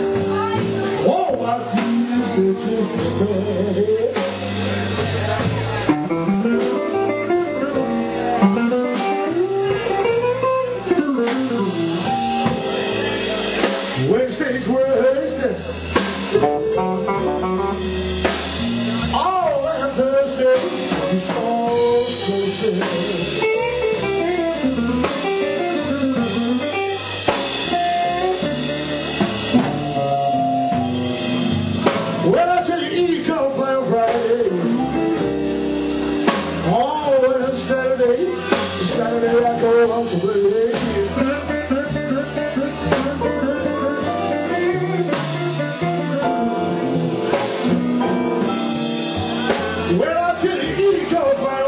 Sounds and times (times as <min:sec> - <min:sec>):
Music: 0:00.0 - 0:51.6.